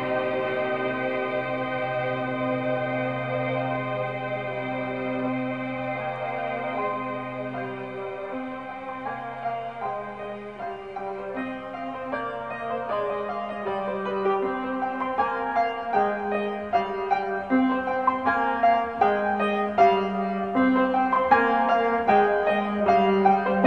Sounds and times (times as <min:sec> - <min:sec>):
Piano: 0:00.0 - 0:23.6.